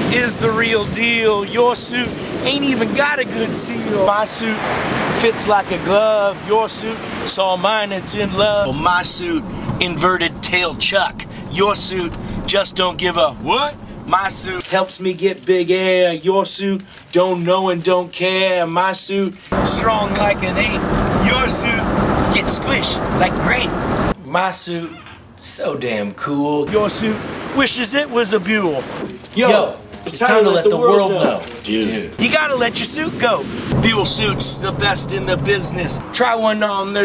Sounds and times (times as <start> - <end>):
Speech: 0.0 - 37.0.